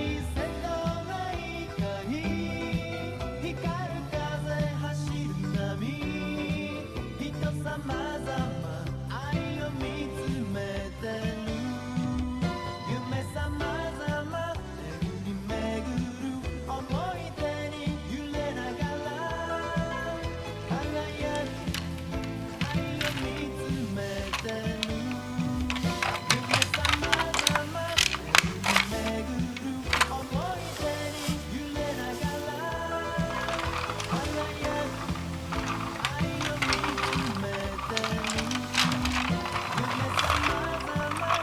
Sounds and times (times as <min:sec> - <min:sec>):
Music: 0:00.0 - 0:41.4.